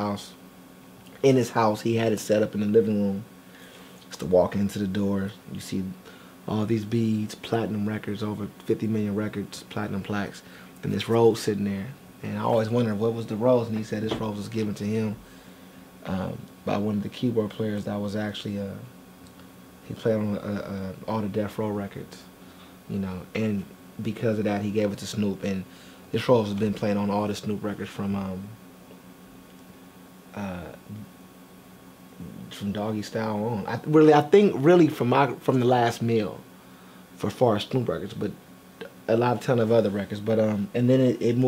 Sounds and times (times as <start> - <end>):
Speech: 0.0 - 0.4, 1.2 - 3.3, 4.1 - 15.2, 16.0 - 18.9, 19.8 - 22.3, 22.9 - 28.6, 30.3 - 31.1, 32.2 - 36.5, 37.2 - 41.4.